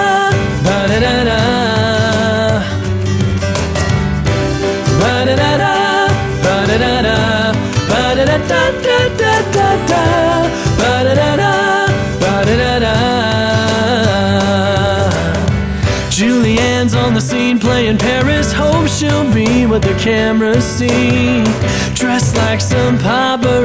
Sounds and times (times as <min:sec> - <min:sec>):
Piano: 0:00.0 - 0:23.6.